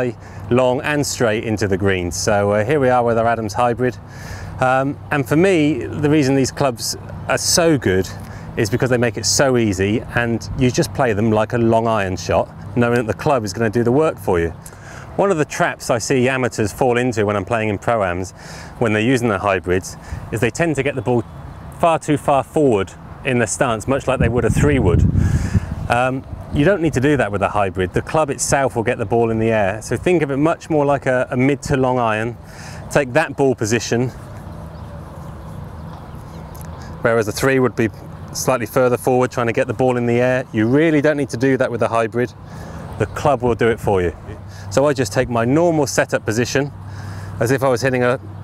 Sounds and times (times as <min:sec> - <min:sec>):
Speech: 0:00.0 - 0:04.0, 0:04.6 - 0:14.6, 0:15.2 - 0:25.1, 0:25.9 - 0:34.2, 0:37.0 - 0:42.4, 0:43.0 - 0:46.8, 0:47.4 - 0:48.3.